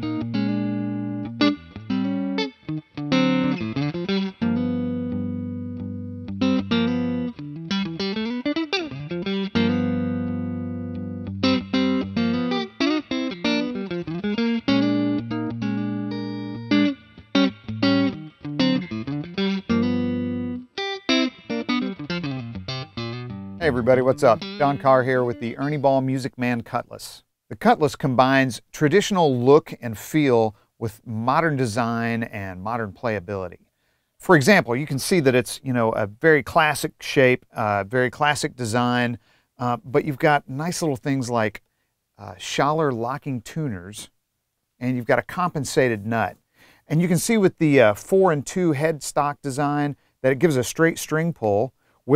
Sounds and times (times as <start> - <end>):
Electric guitar: 0.0 - 25.8
Speech: 23.6 - 33.6, 34.2 - 41.6, 42.2 - 44.1, 44.8 - 52.1.